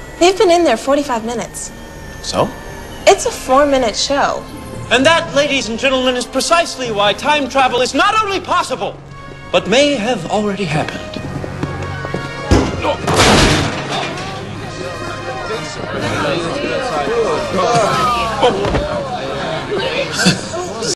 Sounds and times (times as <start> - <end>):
Conversation: 0.0 - 20.9
Music: 0.0 - 20.9.